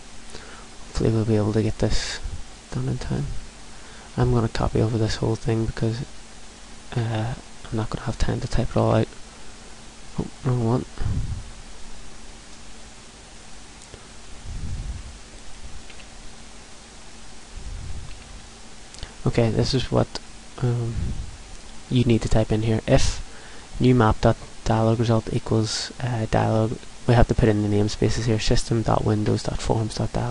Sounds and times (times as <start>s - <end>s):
Speech: 1.0s - 3.4s, 4.2s - 6.1s, 7.0s - 9.1s, 10.2s - 10.9s, 19.2s - 21.0s, 21.9s - 23.2s, 23.8s - 30.3s.